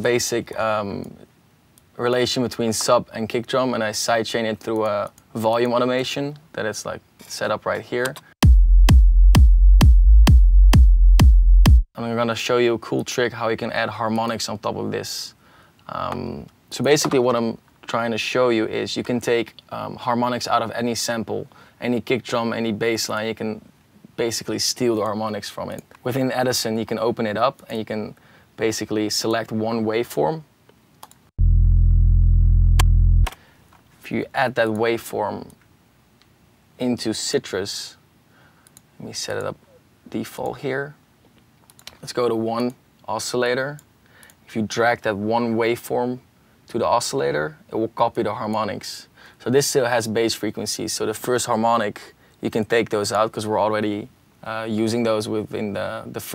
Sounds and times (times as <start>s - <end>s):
Speech: 0.0s - 1.3s, 2.0s - 8.2s, 12.0s - 30.5s, 34.0s - 35.6s, 36.8s - 38.0s, 39.0s - 41.0s, 41.9s - 43.8s, 44.5s - 56.3s
Music: 8.4s - 11.9s.